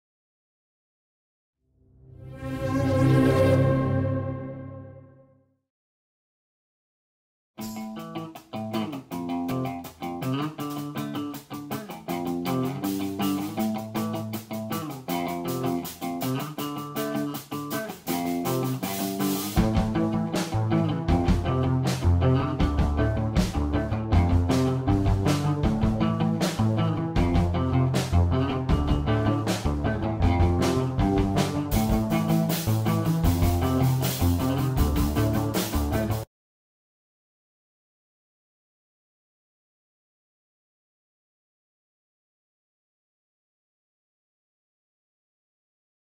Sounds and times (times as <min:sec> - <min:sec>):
Music: 0:01.8 - 0:05.6, 0:07.6 - 0:36.3.